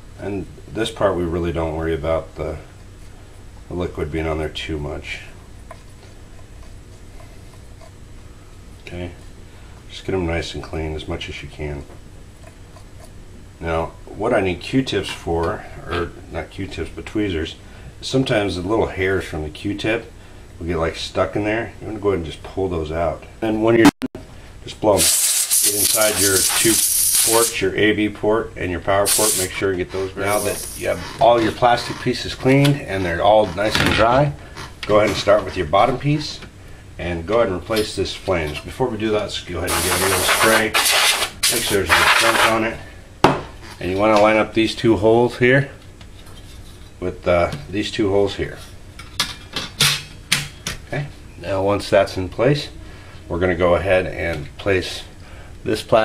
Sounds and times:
Inside, small room: 0:00.0 - 0:56.0
Speech: 0:00.2 - 0:02.7, 0:03.7 - 0:05.4, 0:08.8 - 0:09.2, 0:09.9 - 0:12.0, 0:13.6 - 0:24.0, 0:24.6 - 0:42.9, 0:43.8 - 0:45.8, 0:47.0 - 0:48.7, 0:50.9 - 0:56.0.

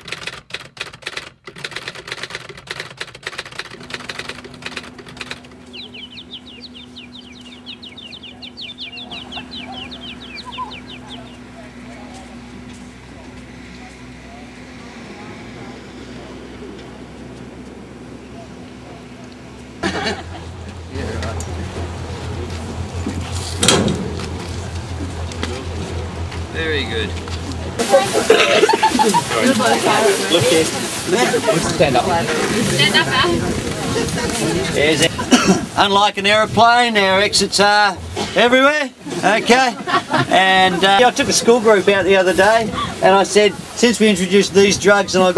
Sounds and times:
Sailboat, sailing ship: 0:00.0 - 0:45.3
Speech: 0:35.8 - 0:45.3.

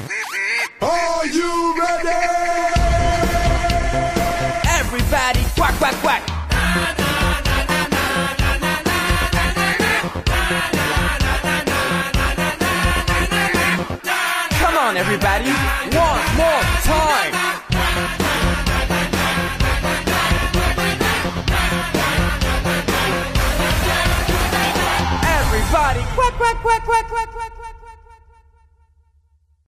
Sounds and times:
Music: 0:01.1 - 0:29.6.

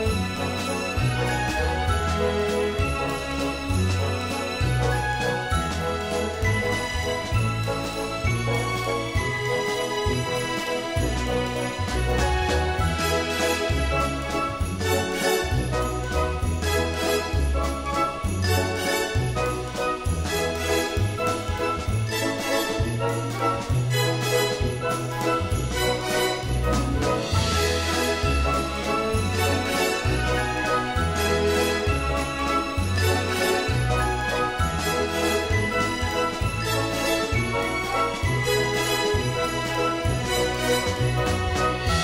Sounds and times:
Music: 0:00.0 - 0:42.0.

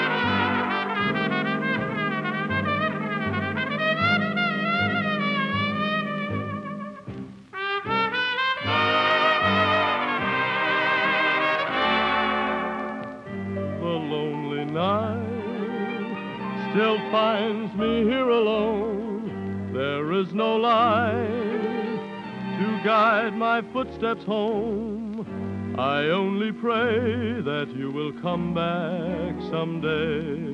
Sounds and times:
Trombone: 0:00.0 - 0:14.2.

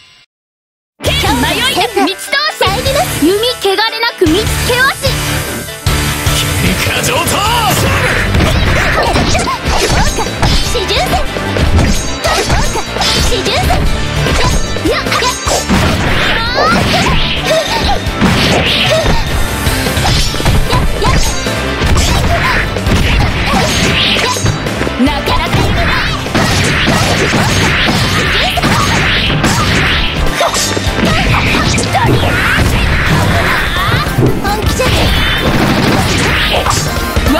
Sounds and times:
Music: 0:01.0 - 0:37.3.

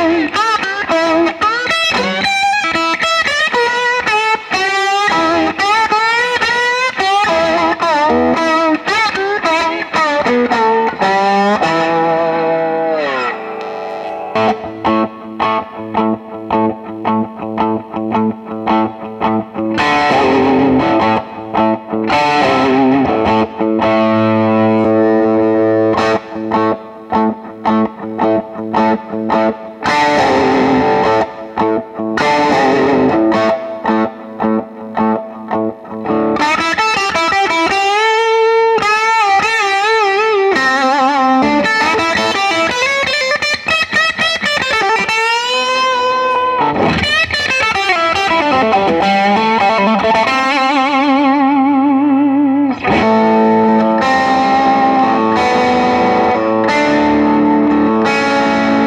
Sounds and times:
Electric guitar: 0:00.0 - 0:58.8.

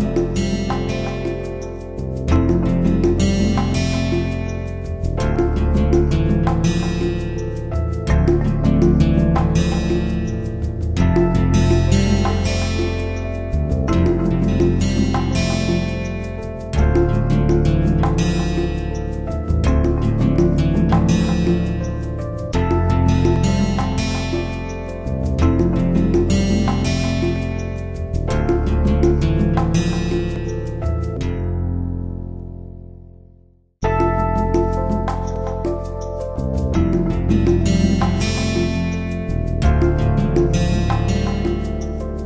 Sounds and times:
Music: 0:00.0 - 0:42.2.

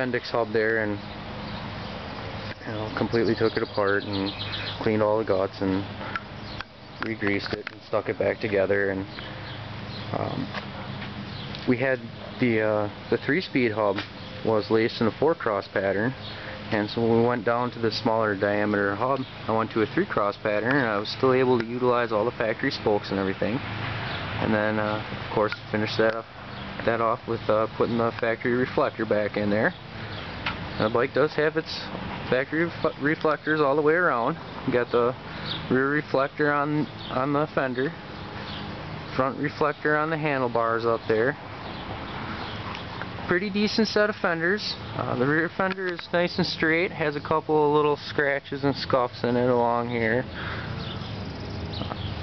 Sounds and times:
Speech: 0:00.0 - 0:01.0, 0:02.6 - 0:05.9, 0:07.0 - 0:09.1, 0:10.1 - 0:10.6, 0:11.6 - 0:23.6, 0:24.4 - 0:29.8, 0:30.8 - 0:38.0, 0:39.1 - 0:41.4, 0:43.3 - 0:50.3.

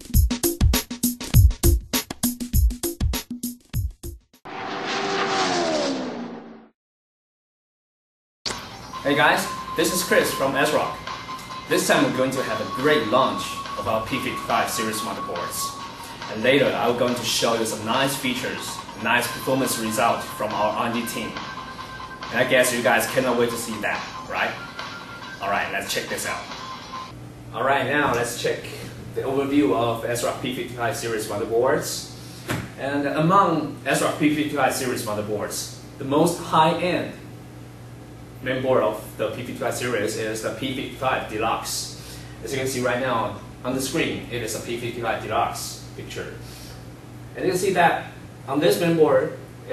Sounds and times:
Sound effect: 0:04.5 - 0:06.8.

